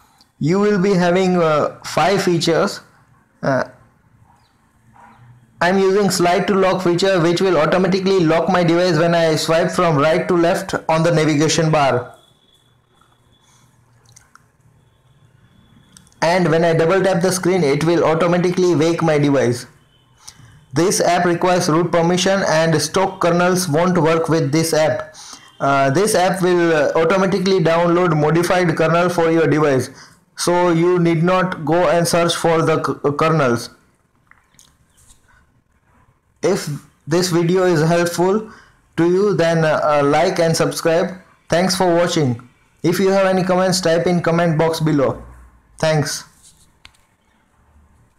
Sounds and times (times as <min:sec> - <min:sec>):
Speech: 0:00.4 - 0:03.8, 0:05.6 - 0:12.2, 0:16.2 - 0:19.7, 0:20.8 - 0:33.8, 0:36.4 - 0:45.2, 0:45.8 - 0:46.4.